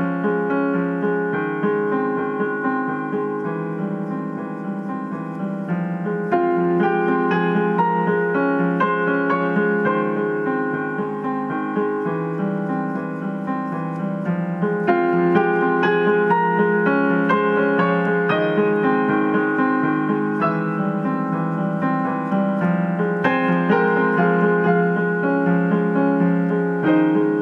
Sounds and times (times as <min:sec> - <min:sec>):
Music: 0:00.0 - 0:27.4.